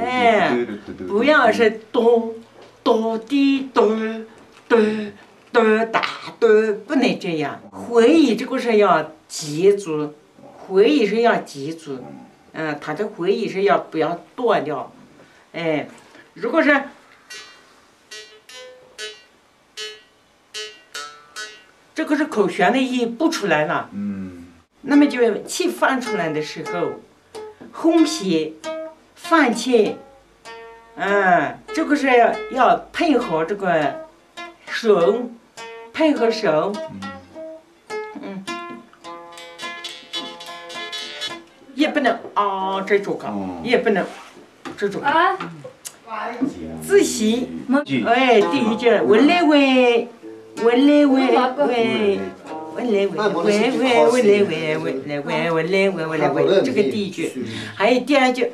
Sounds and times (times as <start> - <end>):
Speech: 0.0 - 14.9, 15.6 - 17.0, 22.0 - 27.0, 27.8 - 28.6, 29.2 - 30.0, 31.0 - 34.0, 36.0 - 37.2, 41.7 - 44.2, 44.8 - 58.5
Musical instrument: 17.3 - 21.8, 36.8 - 37.6, 38.5 - 41.5, 48.3 - 49.6, 50.2 - 54.5.